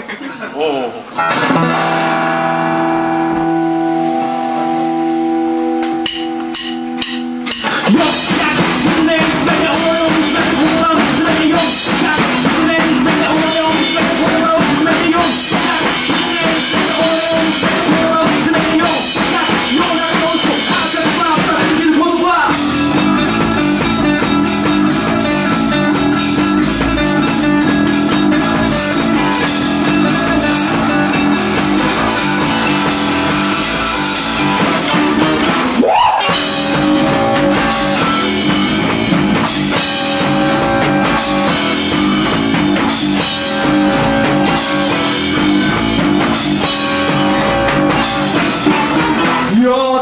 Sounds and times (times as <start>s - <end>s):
Music: 1.2s - 50.0s.